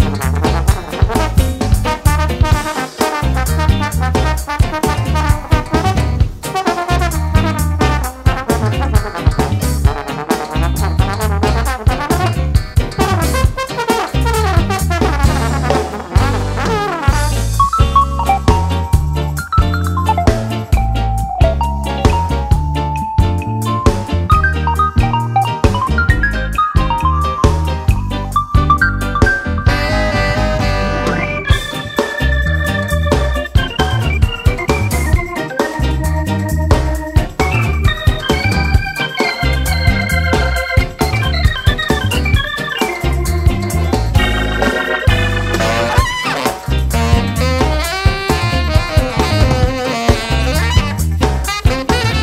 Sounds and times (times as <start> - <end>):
Music: 0.0 - 52.2.